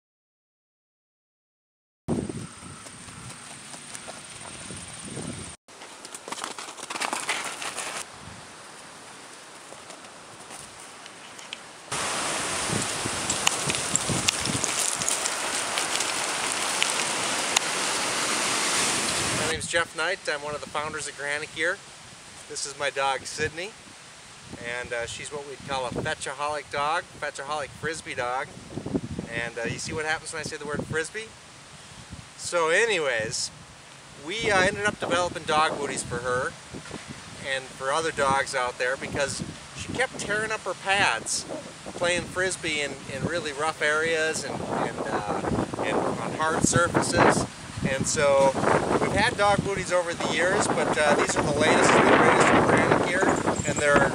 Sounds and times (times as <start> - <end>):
Outside, rural or natural: 2.1 - 54.1.